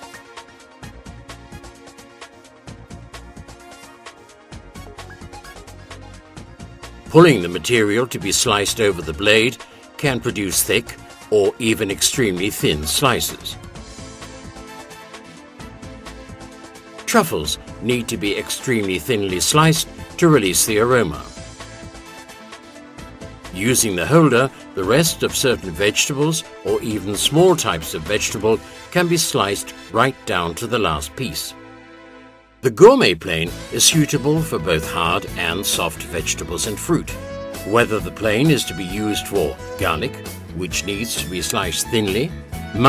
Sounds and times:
Music: 0.0s - 42.8s
Speech: 7.1s - 13.6s, 17.1s - 21.3s, 23.5s - 31.6s, 32.6s - 42.8s.

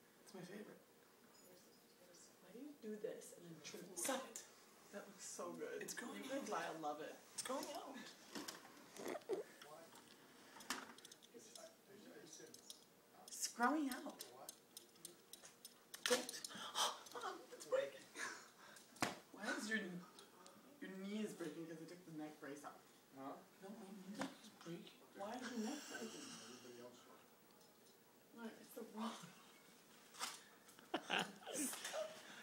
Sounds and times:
Breathing: 18.2s - 19.0s, 25.6s - 26.8s.

